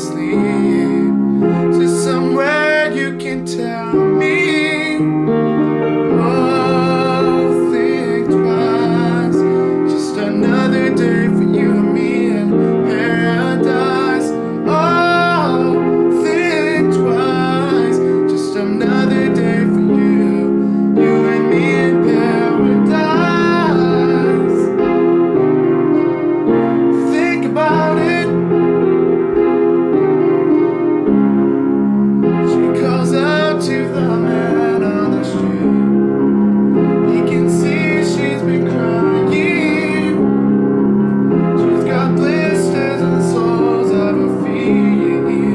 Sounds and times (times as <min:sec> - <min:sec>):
Male singing: 0:00.0 - 0:05.1, 0:06.1 - 0:24.7, 0:27.0 - 0:28.4, 0:32.5 - 0:35.9, 0:37.0 - 0:40.3, 0:41.6 - 0:45.5
Music: 0:00.0 - 0:45.5.